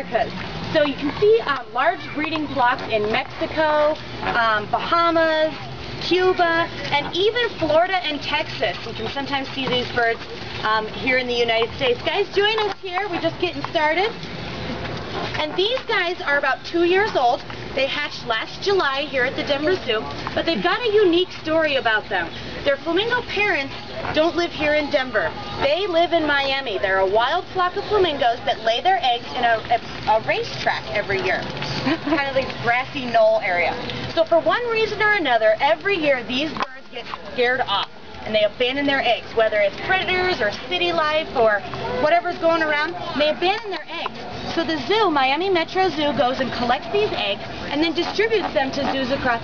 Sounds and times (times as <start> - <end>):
Speech: 0.0 - 14.2, 15.4 - 49.4.